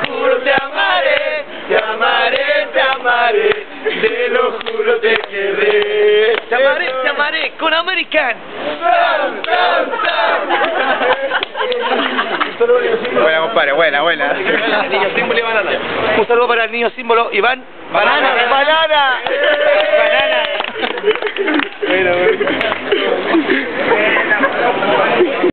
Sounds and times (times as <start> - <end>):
Applause: 19.2 - 23.0.